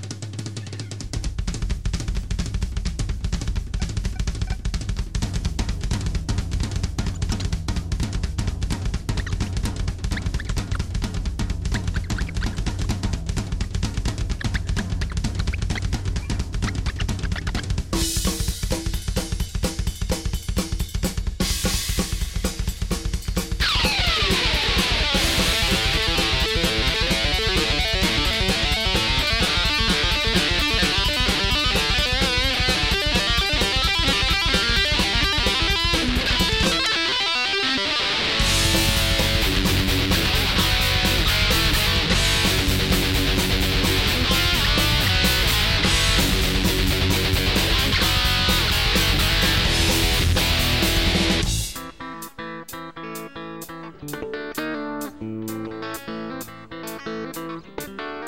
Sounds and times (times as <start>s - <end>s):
Bass guitar: 0.0s - 58.2s.